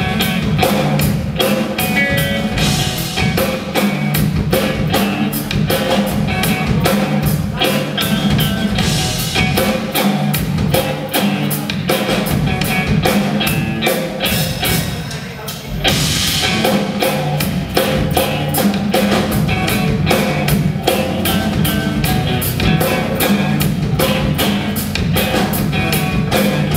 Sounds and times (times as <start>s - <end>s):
Music: 0.0s - 26.7s.